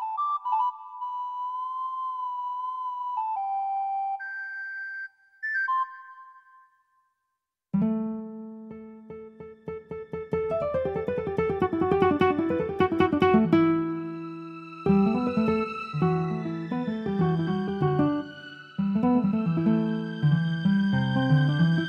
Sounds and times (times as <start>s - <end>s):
New-age music: 0.0s - 7.2s, 7.8s - 21.8s
Electric piano: 8.0s - 14.2s.